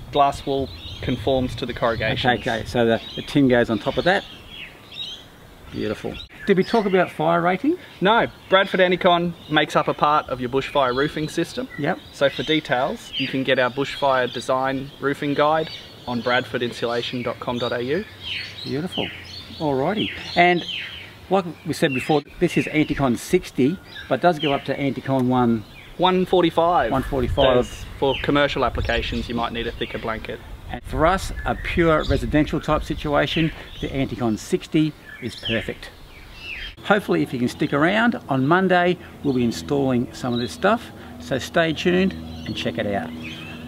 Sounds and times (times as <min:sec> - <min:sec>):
Outside, rural or natural: 0:00.0 - 0:43.6
Speech: 0:00.1 - 0:04.3, 0:05.7 - 0:36.0, 0:36.8 - 0:43.2.